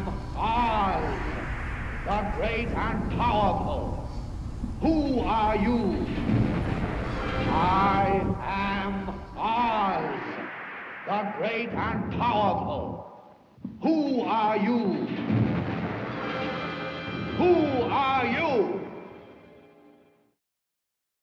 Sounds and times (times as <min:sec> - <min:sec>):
Speech: 0:00.0 - 0:01.4, 0:02.1 - 0:04.2, 0:04.8 - 0:06.2, 0:07.5 - 0:10.4, 0:11.1 - 0:15.1, 0:17.4 - 0:18.9
Music: 0:05.9 - 0:09.3, 0:14.6 - 0:20.4.